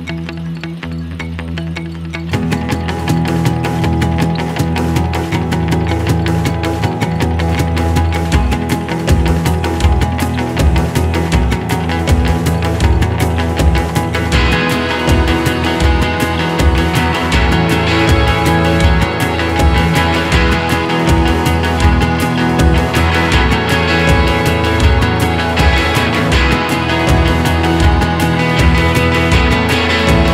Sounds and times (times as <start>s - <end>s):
Music: 0.0s - 30.3s.